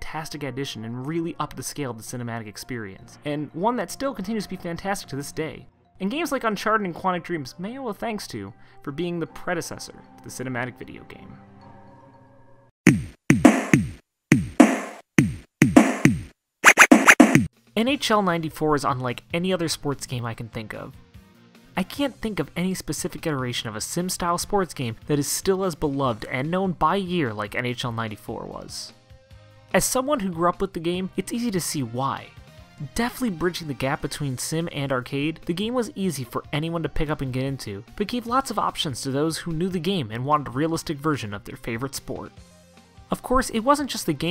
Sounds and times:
Speech: 0:00.0 - 0:11.4, 0:17.8 - 0:21.0, 0:21.8 - 0:29.0, 0:29.7 - 0:42.3, 0:43.1 - 0:44.3
Music: 0:00.0 - 0:12.8, 0:13.4 - 0:15.0, 0:15.7 - 0:44.3.

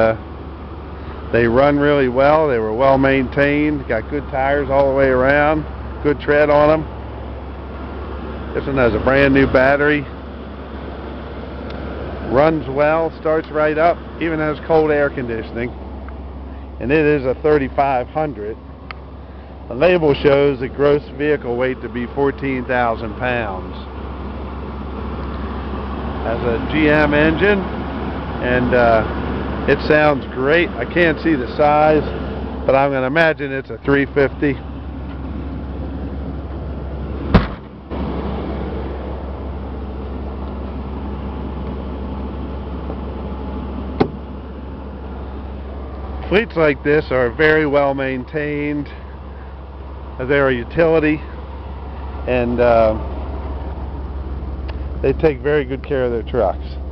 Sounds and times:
Speech: 0:00.0 - 0:00.2, 0:01.3 - 0:06.9, 0:08.5 - 0:10.2, 0:12.3 - 0:15.8, 0:16.8 - 0:18.6, 0:19.7 - 0:23.9, 0:26.2 - 0:27.7, 0:28.4 - 0:34.6, 0:46.2 - 0:49.0, 0:50.2 - 0:51.4, 0:52.3 - 0:53.0, 0:55.0 - 0:56.8
Vehicle: 0:00.0 - 0:56.9.

